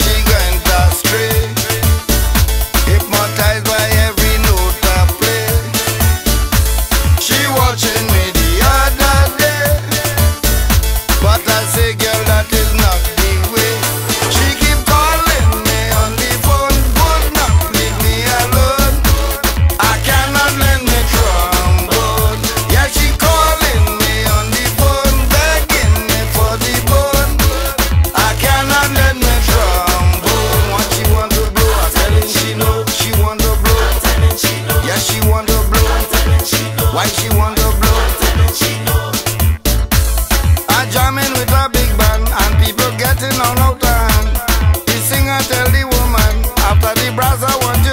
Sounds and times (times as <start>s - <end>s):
Afrobeat: 0.0s - 47.9s.